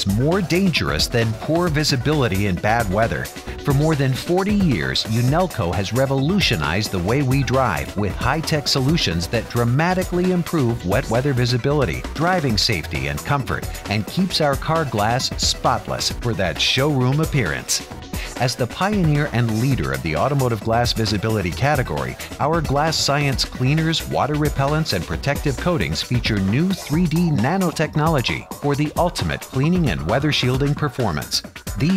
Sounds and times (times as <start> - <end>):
Music: 0.0 - 31.9
Speech: 0.0 - 31.9.